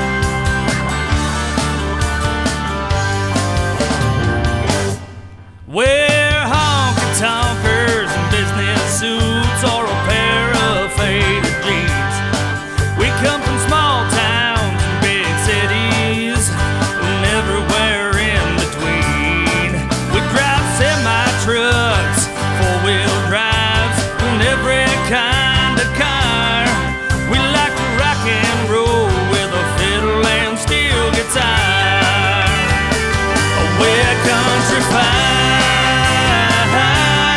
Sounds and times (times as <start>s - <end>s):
Country: 0.0s - 37.3s
Exciting music: 0.0s - 37.3s.